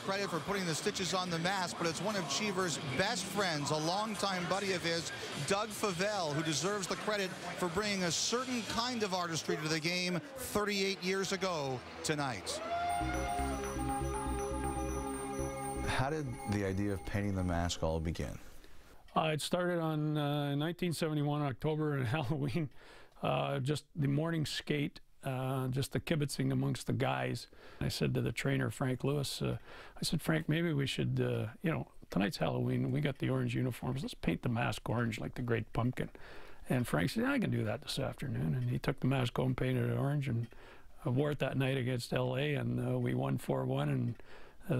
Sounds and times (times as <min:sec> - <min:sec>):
Speech: 0:00.0 - 0:12.6, 0:15.9 - 0:18.5, 0:19.1 - 0:36.1, 0:36.7 - 0:44.7.